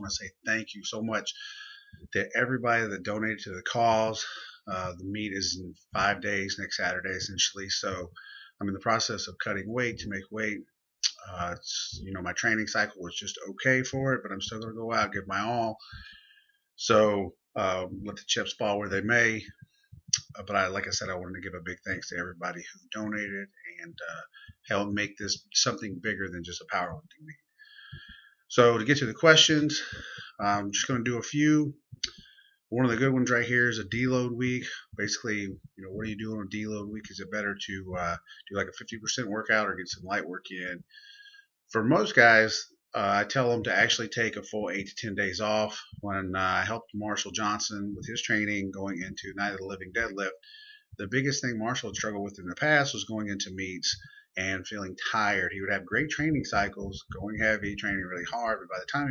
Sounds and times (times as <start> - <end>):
Speech: 0.0 - 16.2, 16.8 - 27.5, 28.5 - 59.1.